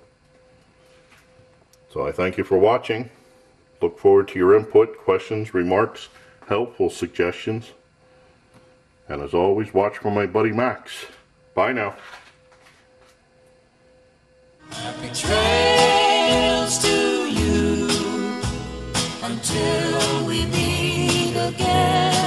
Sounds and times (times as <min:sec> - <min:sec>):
Speech: 0:01.9 - 0:03.2, 0:03.8 - 0:07.8, 0:09.1 - 0:12.0
Music: 0:14.6 - 0:22.2.